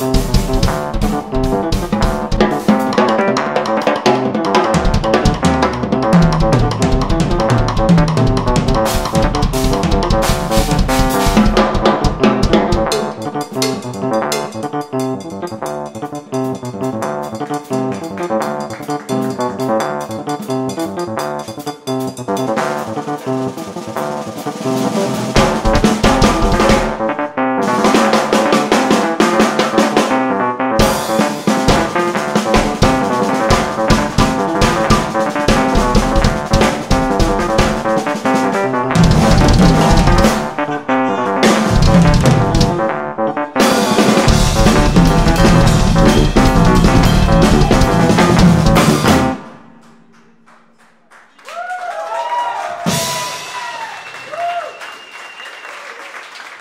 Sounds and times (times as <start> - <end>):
Snare drum: 0.0 - 14.6, 22.5 - 40.8, 41.4 - 43.0, 43.6 - 49.6
Bass drum: 0.0 - 21.4, 24.4 - 30.2, 30.8 - 50.1
Bass guitar: 0.0 - 50.8
Drum kit: 0.0 - 50.8, 52.7 - 54.6.